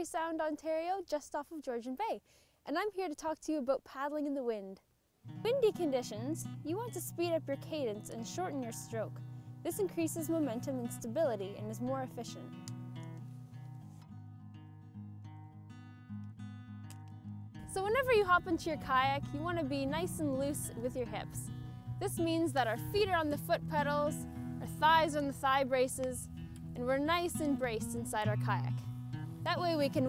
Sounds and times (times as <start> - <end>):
Speech: 0.0 - 4.8, 5.4 - 12.5, 17.7 - 28.8, 29.5 - 30.0
Music: 5.2 - 30.0.